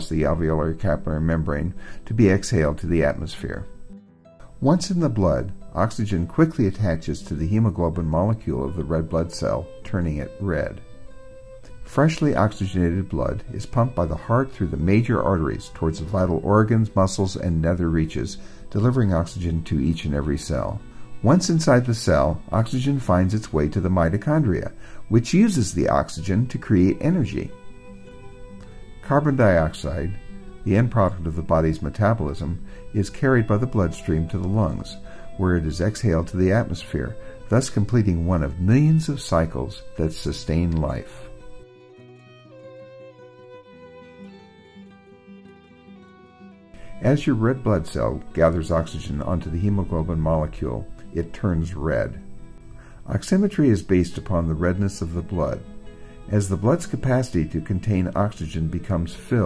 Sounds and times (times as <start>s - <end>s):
Speech: 0.0s - 3.7s, 4.6s - 10.8s, 11.9s - 27.6s, 29.0s - 41.3s, 47.0s - 52.2s, 53.0s - 55.7s, 56.3s - 59.4s
Music: 0.0s - 59.4s.